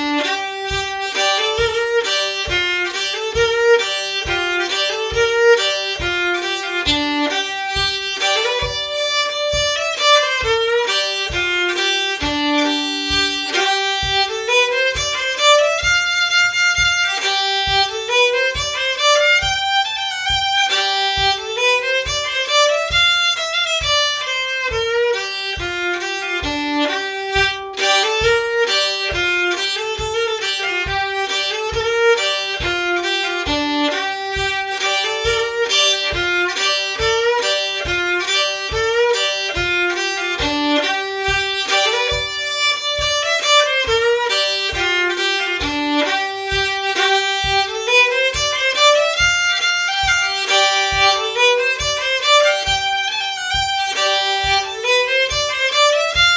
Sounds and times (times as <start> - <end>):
Violin, fiddle: 0.0 - 56.3.